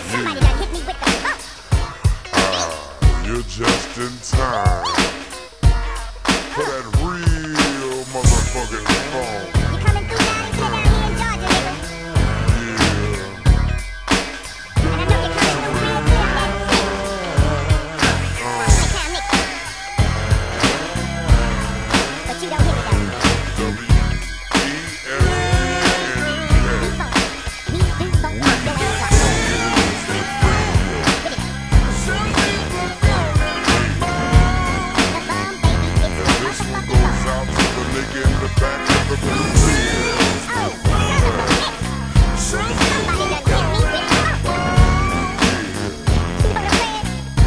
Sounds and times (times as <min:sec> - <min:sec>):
Speech: 0:00.0 - 0:01.6, 0:02.3 - 0:05.1, 0:06.5 - 0:13.5, 0:14.8 - 0:19.8, 0:20.6 - 0:47.2
Hip hop music: 0:00.0 - 0:47.4.